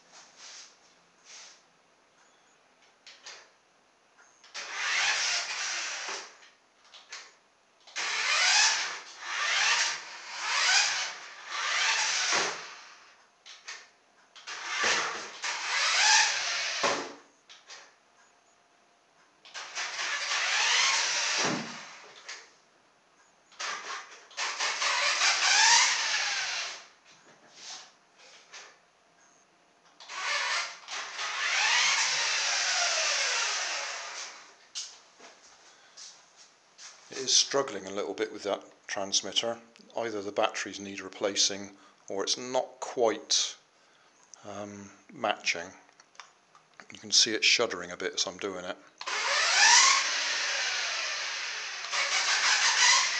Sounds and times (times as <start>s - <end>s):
Inside, small room: 0.0s - 53.1s
Speech: 37.1s - 43.6s, 44.4s - 45.9s, 46.8s - 48.8s.